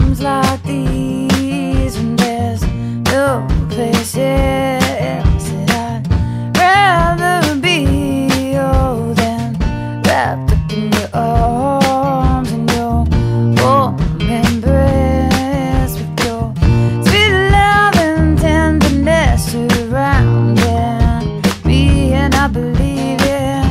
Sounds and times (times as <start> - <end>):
Music: 0.0 - 23.7.